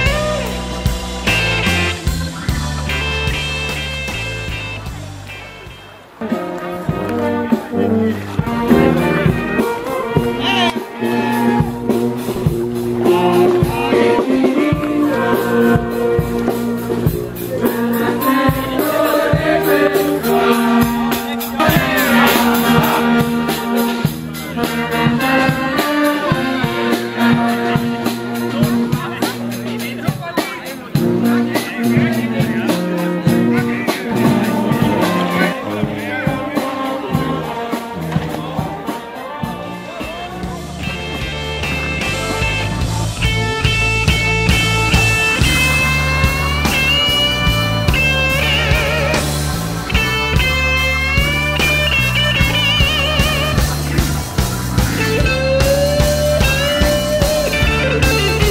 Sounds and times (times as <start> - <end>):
Music: 0.0 - 58.5
Speech: 4.5 - 11.8, 13.0 - 58.5.